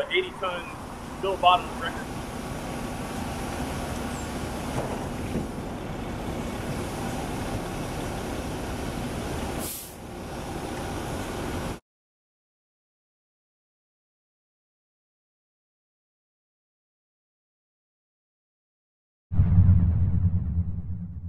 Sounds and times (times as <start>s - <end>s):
Truck: 0.0s - 11.8s.